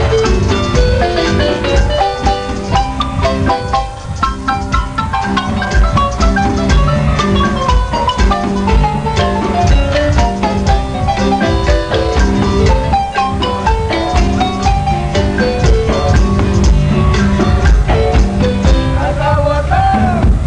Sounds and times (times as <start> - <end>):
Marimba, xylophone: 0.0 - 19.4.